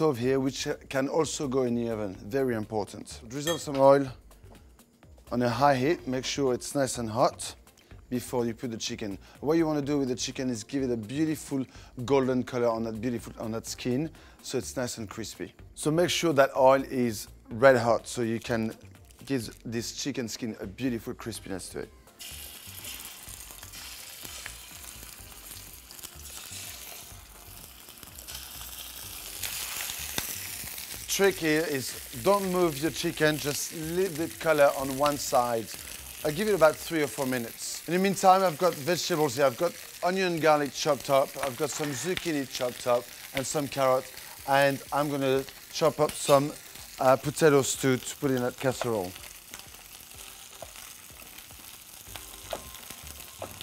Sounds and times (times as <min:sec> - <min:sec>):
Speech: 0:00.0 - 0:04.2, 0:05.3 - 0:21.9, 0:31.1 - 0:49.2.